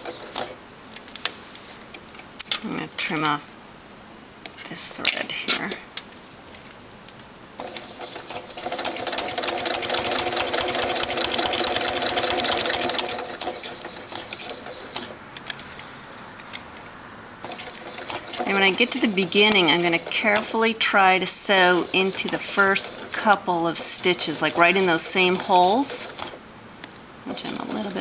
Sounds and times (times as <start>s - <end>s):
Sewing machine: 0.0s - 0.6s, 7.6s - 15.9s, 17.4s - 26.4s
Speech: 2.6s - 3.5s, 4.6s - 5.9s, 18.4s - 26.2s, 27.3s - 28.0s.